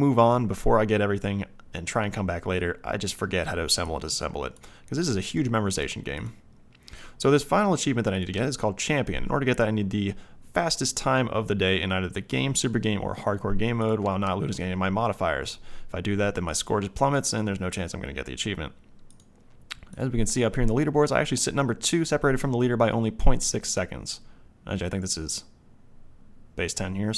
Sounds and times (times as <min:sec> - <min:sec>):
Speech: 0:00.0 - 0:06.4, 0:07.2 - 0:18.8, 0:19.7 - 0:25.6, 0:26.6 - 0:27.1.